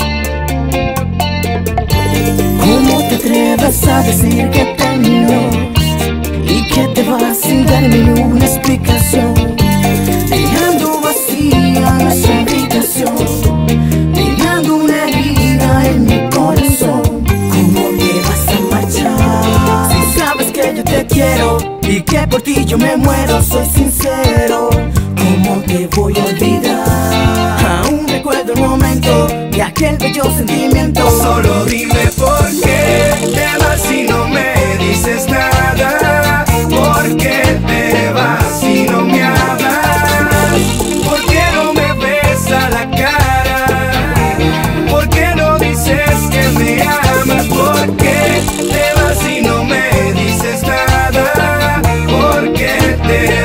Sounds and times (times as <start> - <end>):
Music: 0.0 - 53.4.